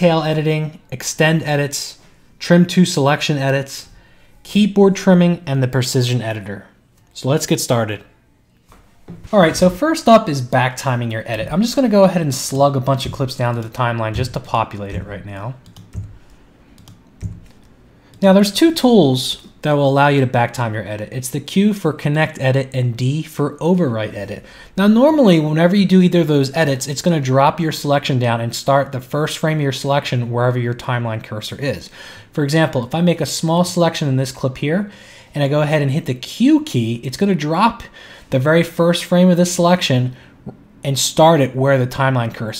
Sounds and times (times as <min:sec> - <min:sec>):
Speech: 0:00.0 - 0:08.2, 0:09.3 - 0:15.6, 0:18.2 - 0:40.2, 0:40.8 - 0:42.6.